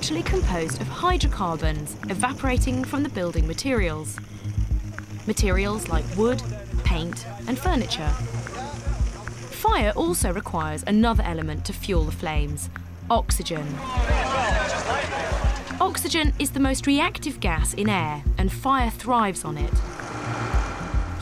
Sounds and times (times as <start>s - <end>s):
Speech: 0.0s - 4.2s, 5.3s - 19.8s
Music: 0.0s - 21.2s.